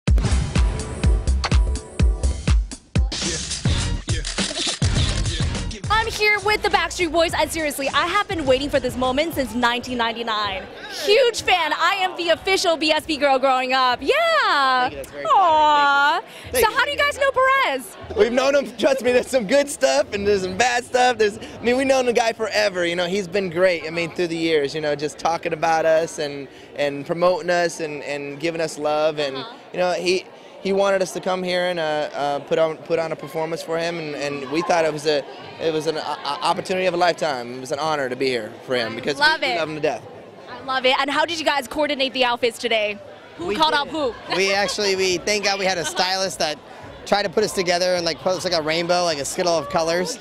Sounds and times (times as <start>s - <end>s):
Music: 0.1s - 10.7s, 16.5s - 22.1s.